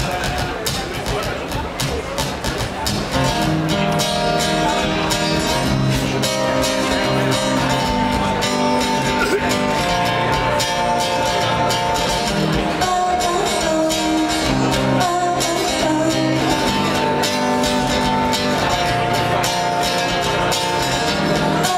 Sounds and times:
Music: 0:00.0 - 0:21.7.

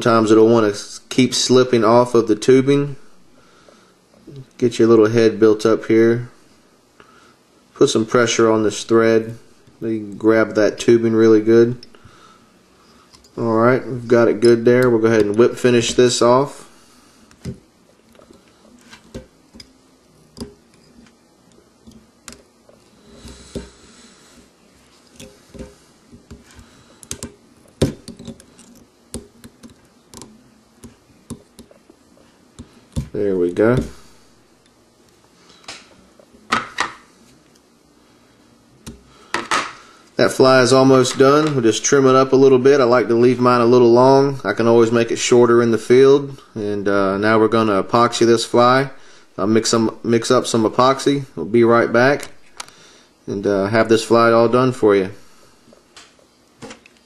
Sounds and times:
Speech: 0:04.3 - 0:06.3, 0:07.8 - 0:11.8, 0:13.4 - 0:16.6, 0:33.1 - 0:34.0, 0:40.2 - 0:52.3, 0:53.3 - 0:55.2.

